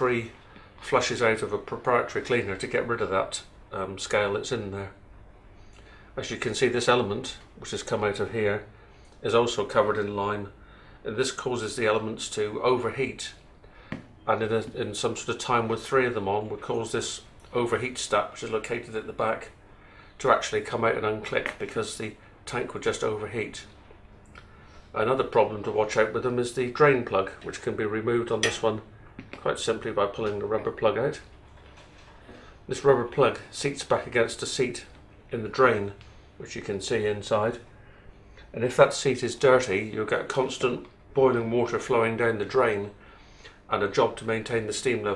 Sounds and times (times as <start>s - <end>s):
Speech: 0.0s - 5.0s, 6.2s - 13.4s, 14.3s - 19.6s, 20.2s - 23.8s, 24.9s - 31.3s, 32.7s - 37.7s, 38.5s - 43.0s, 43.7s - 45.1s.